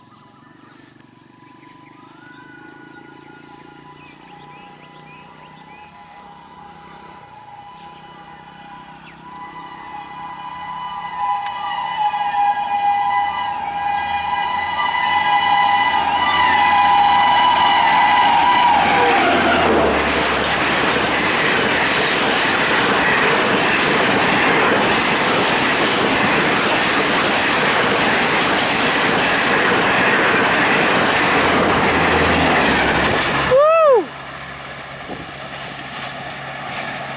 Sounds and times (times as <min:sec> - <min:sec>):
Train whistle: 0:02.1 - 0:21.5.